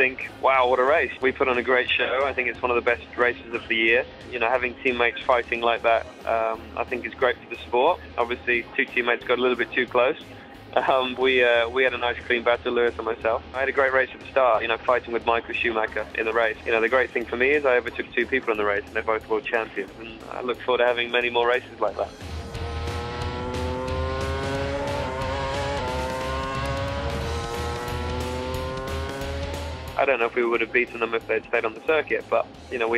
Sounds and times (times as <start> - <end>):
Speech: 0.0 - 10.2, 10.8 - 22.1, 30.0 - 32.9
Music: 0.0 - 32.9.